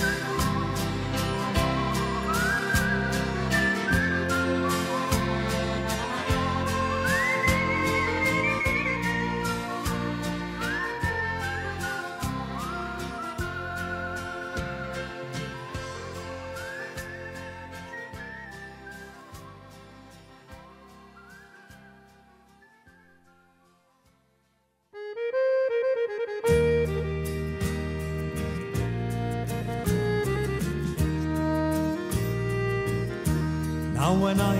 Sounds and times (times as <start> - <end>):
Wind instrument, woodwind instrument: 0.0 - 23.5, 24.9 - 34.5.